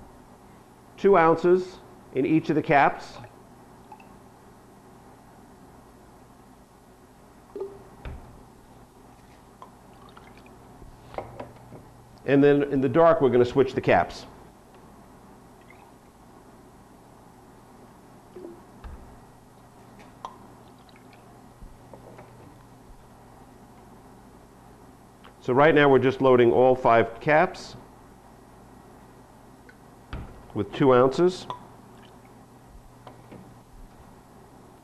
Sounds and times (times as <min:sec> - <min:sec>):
Speech: 0:01.0 - 0:03.3, 0:12.3 - 0:14.4, 0:25.4 - 0:27.8, 0:30.6 - 0:31.5.